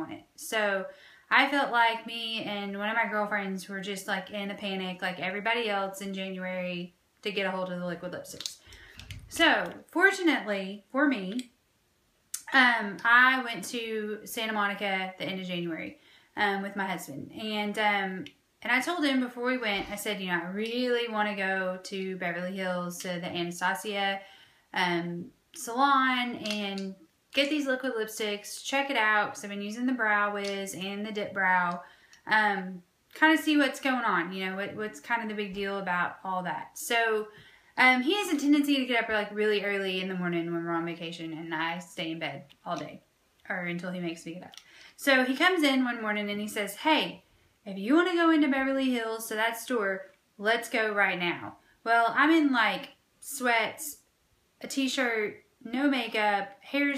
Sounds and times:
Speech: 0.0s - 8.6s, 9.3s - 11.5s, 12.4s - 24.2s, 24.8s - 54.0s, 54.6s - 56.9s.

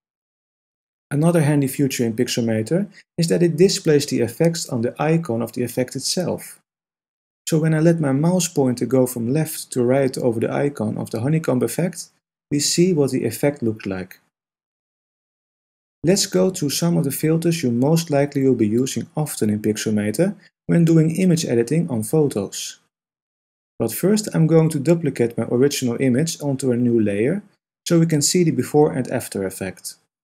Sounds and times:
Speech: 1.1s - 6.6s, 7.5s - 14.2s, 16.1s - 22.9s, 23.8s - 30.1s.

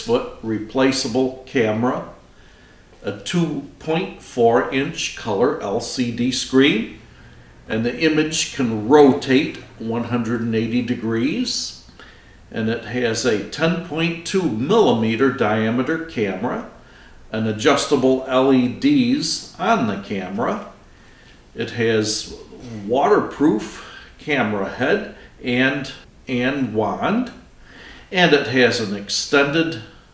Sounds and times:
Speech: 0.0s - 2.2s, 3.0s - 7.0s, 7.7s - 11.8s, 12.5s - 20.8s, 21.6s - 27.5s, 28.1s - 30.0s.

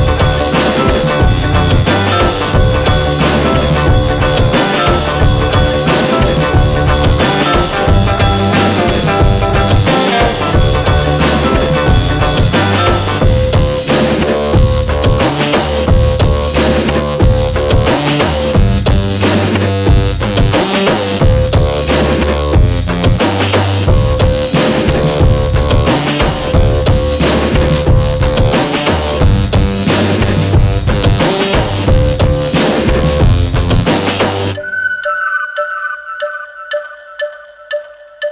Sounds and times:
Music: 0.0s - 38.3s.

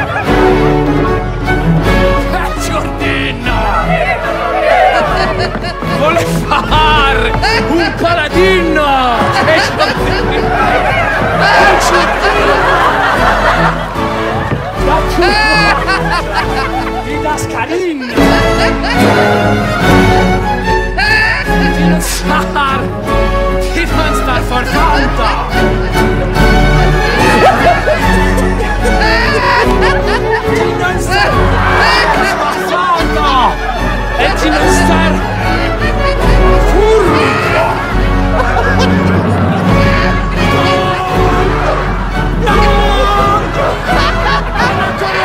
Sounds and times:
Music: 0.0s - 45.2s.

